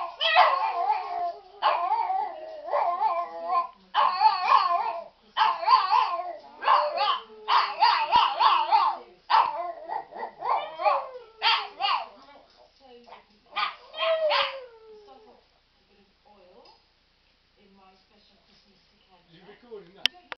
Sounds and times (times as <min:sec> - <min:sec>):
Speech: 0:03.5 - 0:09.7, 0:11.0 - 0:16.8, 0:17.6 - 0:20.3.